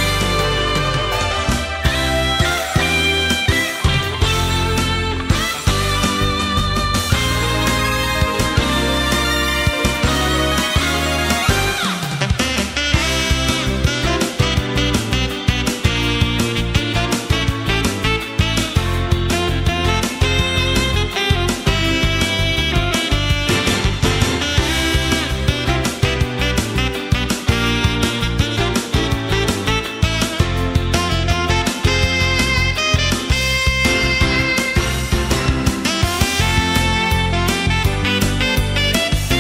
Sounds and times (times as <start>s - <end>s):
Music: 0.0s - 39.4s.